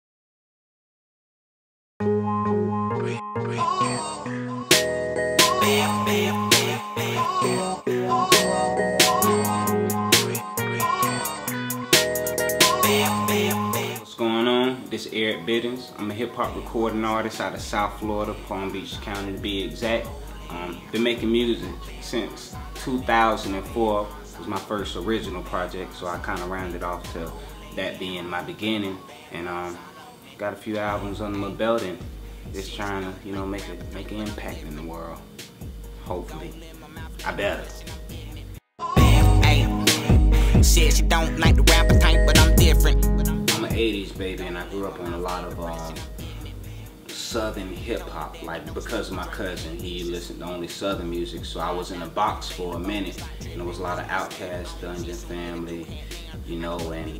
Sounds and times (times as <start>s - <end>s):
Music: 2.0s - 57.1s.